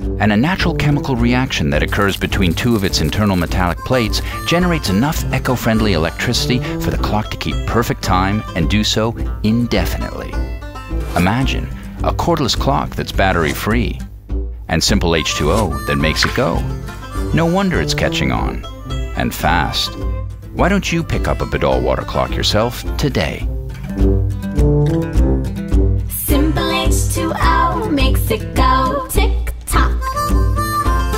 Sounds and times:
Music: 0.0 - 31.1
Speech: 0.2 - 10.4, 11.2 - 14.0, 14.7 - 16.7, 17.3 - 18.6, 19.2 - 20.0, 20.6 - 23.5.

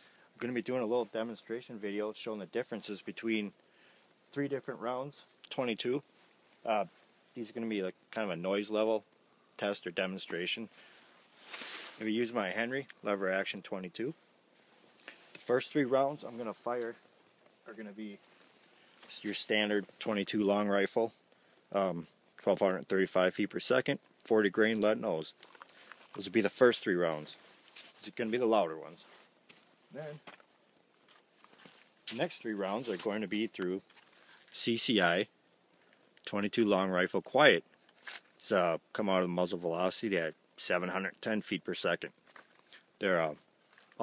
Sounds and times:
Speech: 0.4 - 3.6, 4.3 - 6.0, 6.6 - 9.0, 9.6 - 10.7, 12.0 - 14.2, 15.4 - 17.0, 17.6 - 18.2, 19.1 - 25.4, 26.2 - 27.4, 28.0 - 29.1, 29.9 - 30.3, 32.1 - 33.8, 34.5 - 35.3, 36.2 - 37.6, 38.4 - 42.1, 43.0 - 43.4.

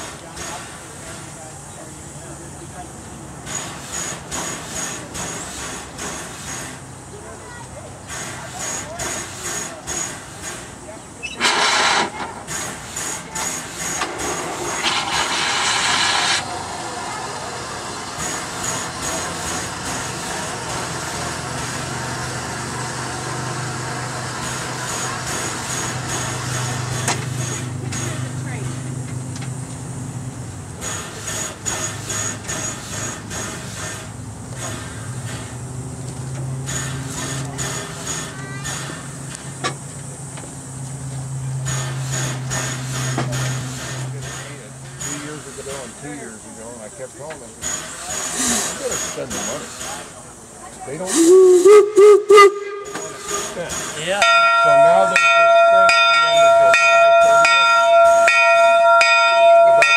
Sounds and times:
Train: 0.0 - 59.9.

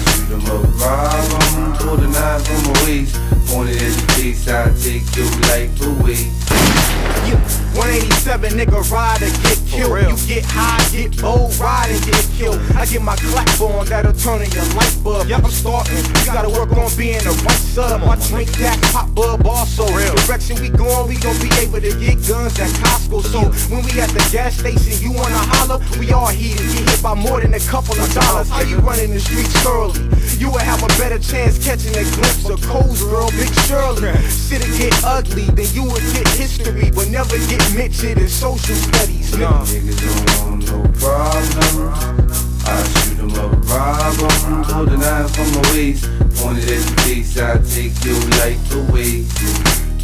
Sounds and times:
Music: 0.0 - 50.0.

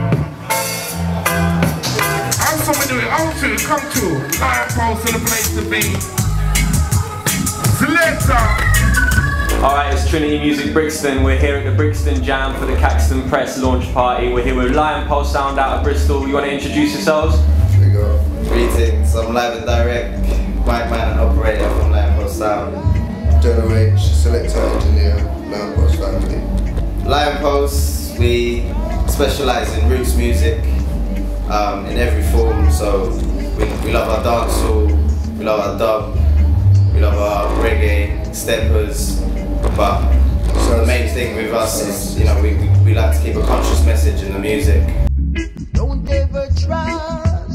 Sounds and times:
Music: 0.0 - 47.5
Speech: 2.4 - 6.1, 7.8 - 8.6, 9.6 - 30.8, 31.5 - 36.2, 36.9 - 45.0.

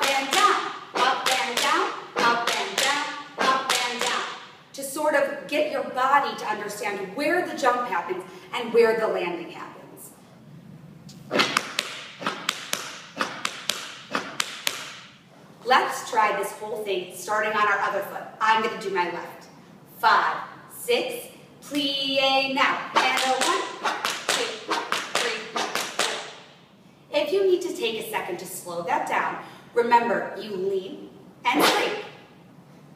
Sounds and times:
Speech: 0.0 - 10.2, 15.6 - 23.7, 25.2 - 26.3, 27.1 - 32.2
Inside, large room or hall: 0.0 - 32.9.

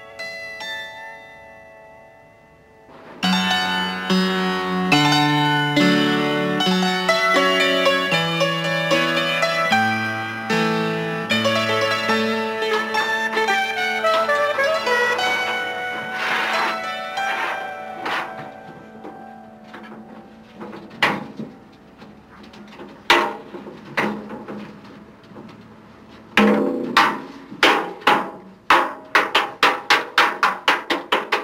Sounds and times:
Music: 0.0 - 31.4.

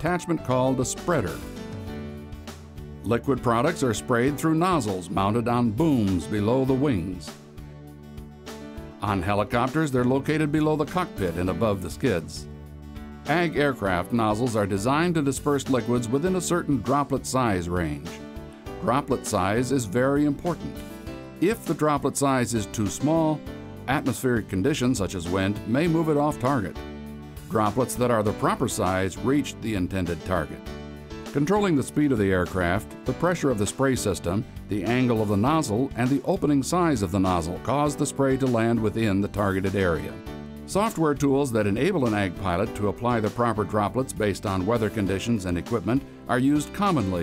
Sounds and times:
Speech: 0.0 - 1.4, 3.0 - 7.3, 9.0 - 12.4, 13.3 - 18.2, 18.8 - 20.8, 21.4 - 26.8, 27.5 - 30.6, 31.4 - 47.2
Music: 0.0 - 47.2.

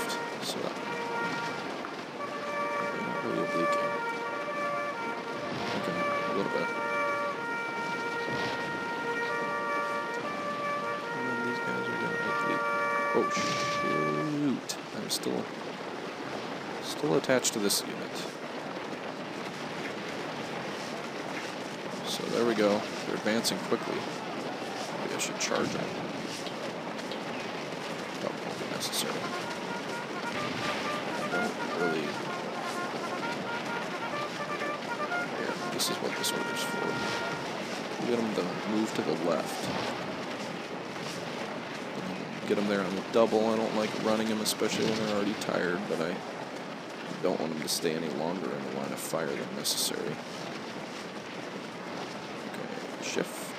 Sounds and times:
Speech: 0.0 - 0.8, 3.0 - 3.9, 5.8 - 6.8, 11.2 - 12.6, 13.2 - 15.5, 16.8 - 18.3, 22.0 - 24.1, 25.0 - 25.9, 28.2 - 29.3, 31.3 - 32.2, 35.4 - 37.2, 38.0 - 39.8, 42.0 - 46.2, 47.2 - 50.2, 52.6 - 53.5.

